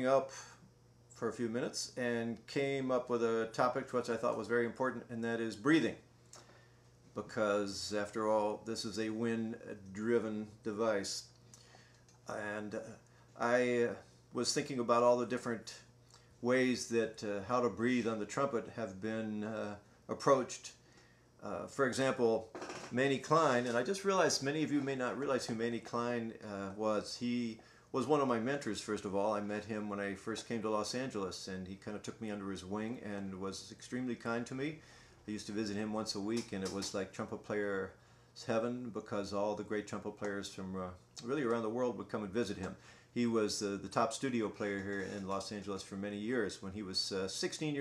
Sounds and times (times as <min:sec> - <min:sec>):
Speech: 0:00.0 - 0:00.4, 0:01.2 - 0:06.0, 0:07.2 - 0:11.3, 0:12.3 - 0:20.8, 0:21.4 - 0:47.8.